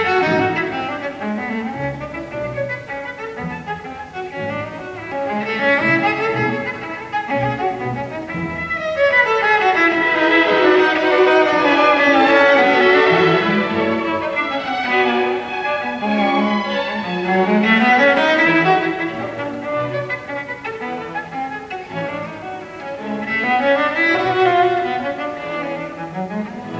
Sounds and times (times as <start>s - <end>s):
String section: 0.0s - 26.8s.